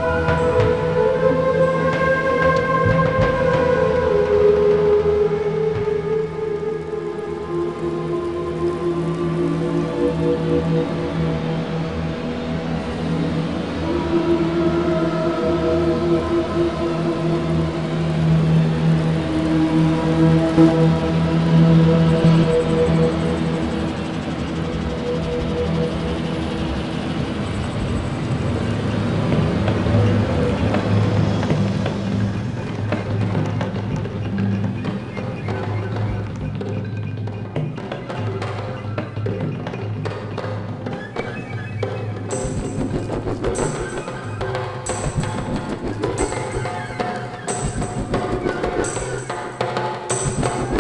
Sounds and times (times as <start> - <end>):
Music: 0.0 - 50.8.